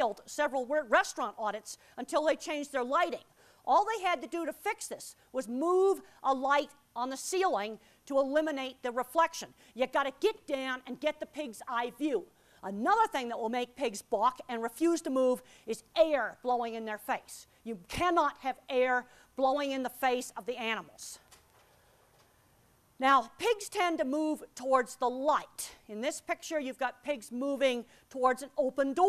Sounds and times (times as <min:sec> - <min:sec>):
Speech: 0:00.0 - 0:21.2, 0:23.0 - 0:29.0.